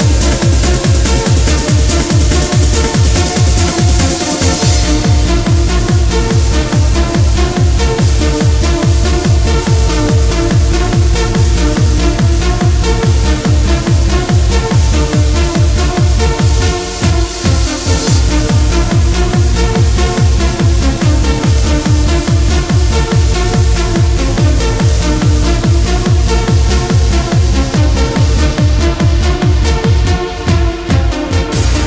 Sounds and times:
Dance music: 0:00.0 - 0:31.8
Trance music: 0:00.0 - 0:31.8.

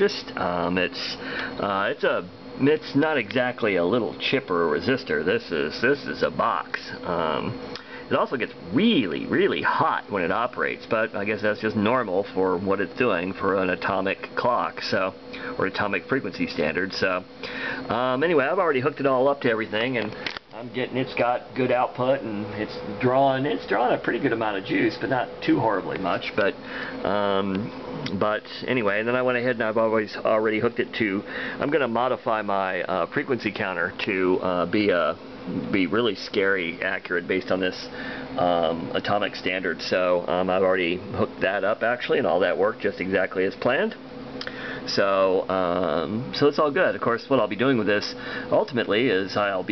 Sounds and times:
Speech: 0:00.0 - 0:44.0, 0:44.8 - 0:49.7.

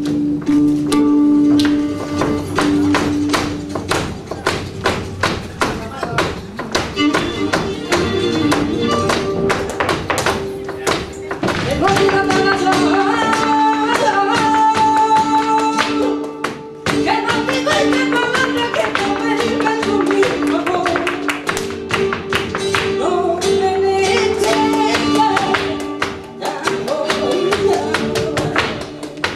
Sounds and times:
Flamenco: 0:00.0 - 0:29.3.

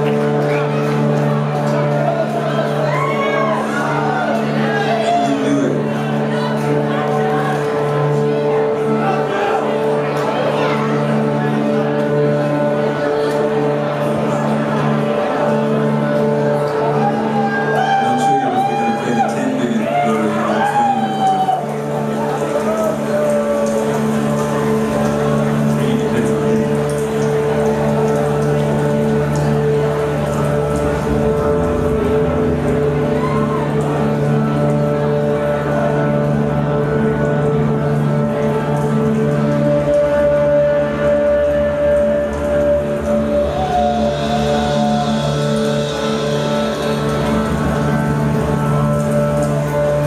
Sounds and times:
Music: 0:00.0 - 0:50.0.

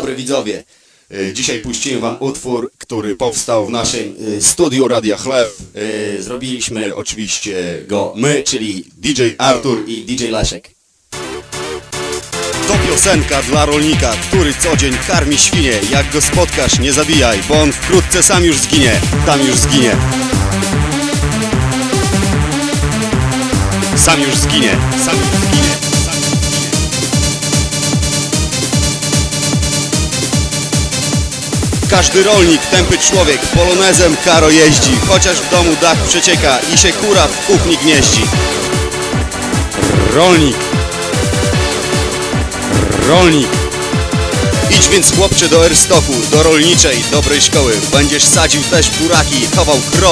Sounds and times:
Speech: 0:00.0 - 0:10.8, 0:12.6 - 0:20.2, 0:24.0 - 0:26.9, 0:31.9 - 0:38.5, 0:40.0 - 0:40.7, 0:43.0 - 0:43.6, 0:44.6 - 0:50.1.

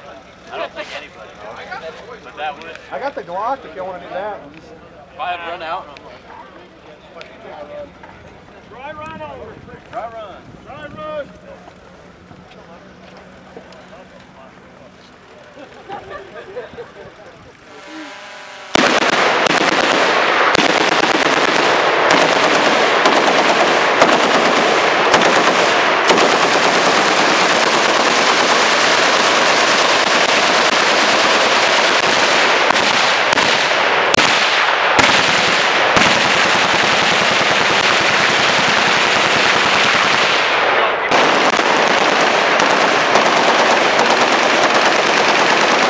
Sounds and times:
Speech: 0:00.0 - 0:18.0
Outside, urban or manmade: 0:00.0 - 0:45.8
Vehicle: 0:00.0 - 0:45.8.

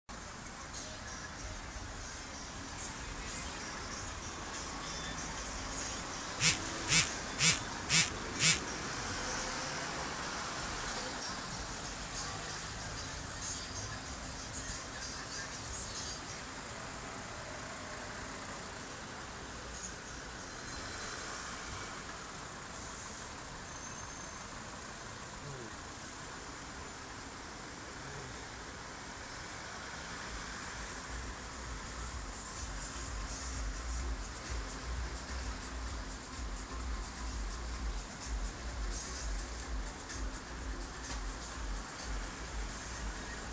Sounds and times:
Motor vehicle (road): 0:00.0 - 0:43.5
Music: 0:00.2 - 0:08.6, 0:11.0 - 0:16.7, 0:31.1 - 0:43.5.

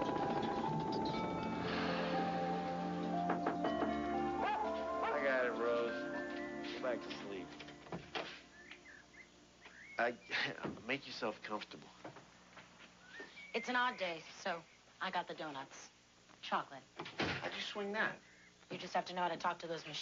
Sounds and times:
Music: 0:00.0 - 0:08.0
Bird vocalization, bird call, bird song: 0:06.0 - 0:07.4, 0:08.5 - 0:10.6, 0:13.0 - 0:14.0.

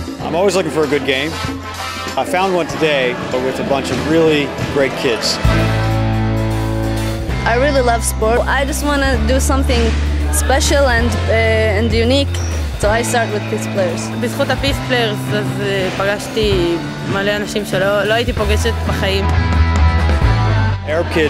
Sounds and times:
Music: 0:00.0 - 0:21.2.

